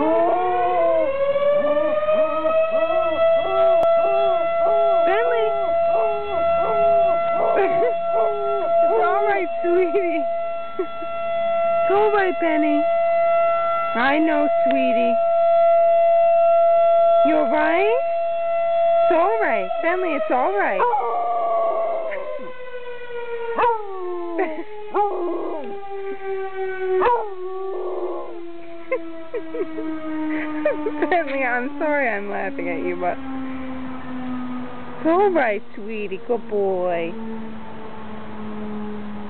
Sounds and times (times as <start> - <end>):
Speech: 5.0 - 5.6, 8.9 - 10.2, 11.9 - 12.8, 14.0 - 15.2, 17.3 - 18.0, 19.1 - 20.8, 30.6 - 33.2, 35.0 - 37.1.